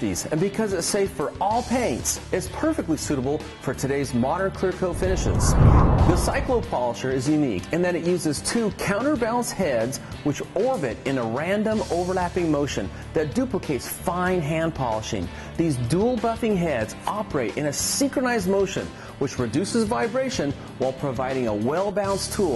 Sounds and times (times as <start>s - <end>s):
Music: 0.0s - 22.5s
Speech: 0.0s - 22.5s.